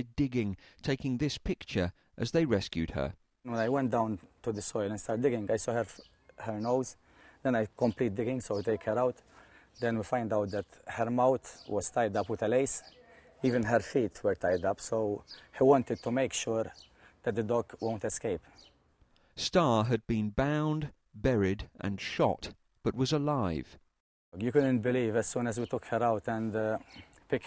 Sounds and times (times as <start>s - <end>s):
Speech: 0.0s - 9.2s, 9.8s - 18.4s, 19.4s - 23.8s, 24.4s - 27.4s.